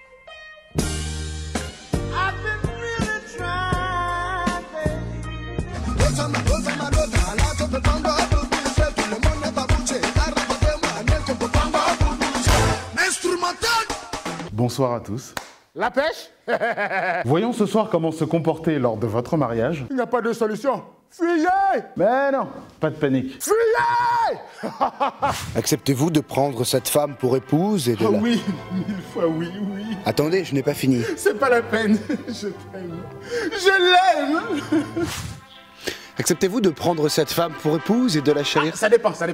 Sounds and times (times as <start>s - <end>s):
Music: 0.0s - 14.6s, 25.6s - 39.3s
Speech: 14.5s - 16.3s, 36.2s - 39.3s.